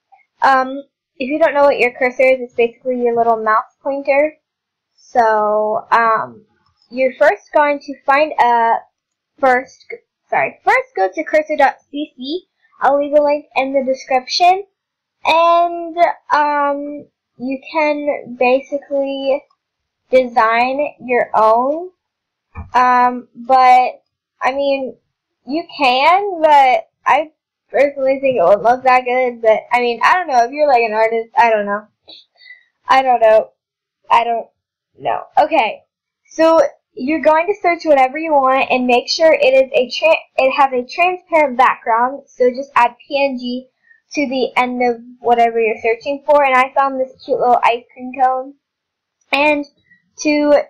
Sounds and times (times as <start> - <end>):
Speech: 0.4 - 4.3, 5.0 - 6.4, 7.0 - 8.8, 9.4 - 14.7, 15.3 - 19.4, 20.2 - 21.9, 22.6 - 24.9, 25.5 - 33.5, 34.1 - 35.8, 36.4 - 48.5, 49.4 - 50.7.